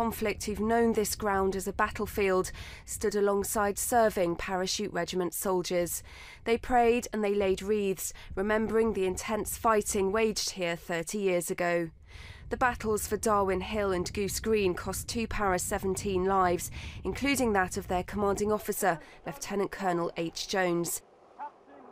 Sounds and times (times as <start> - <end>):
Speech: 0.0 - 11.9, 12.6 - 21.9.